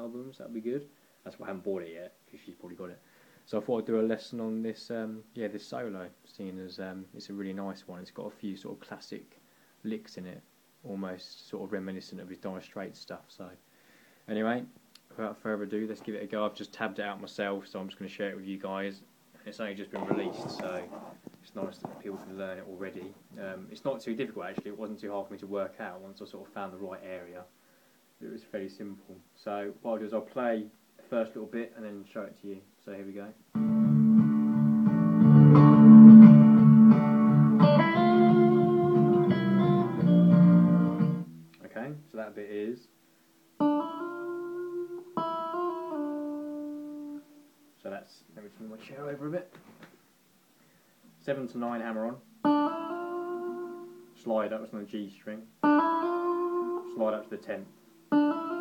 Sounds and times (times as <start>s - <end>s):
Inside, small room: 0.0s - 58.6s
Guitar: 19.4s - 26.4s, 33.5s - 42.2s, 43.5s - 47.8s, 51.0s - 58.6s
Electronic tuner: 33.5s - 41.7s, 43.5s - 47.7s, 52.2s - 54.2s, 55.5s - 58.6s.